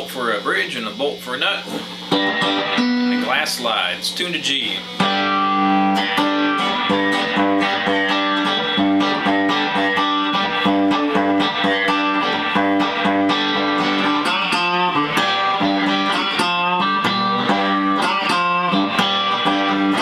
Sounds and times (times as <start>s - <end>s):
Blues: 0.0s - 20.0s
Strum: 1.6s - 20.0s
Acoustic guitar: 4.9s - 20.0s.